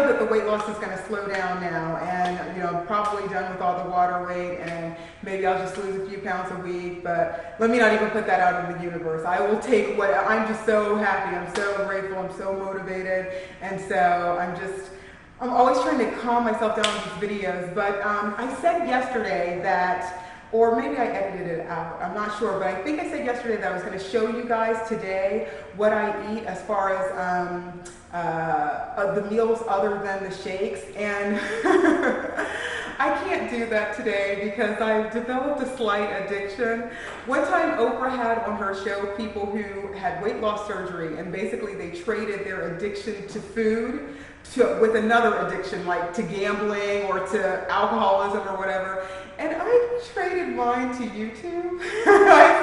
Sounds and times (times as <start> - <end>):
Speech: 0.0 - 52.6.